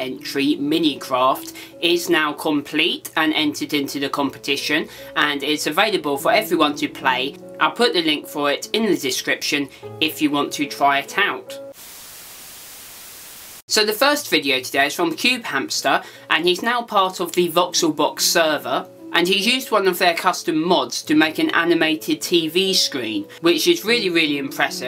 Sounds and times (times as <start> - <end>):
Speech: 0.0 - 11.6, 13.7 - 24.8
Music: 0.0 - 11.8, 13.7 - 24.8.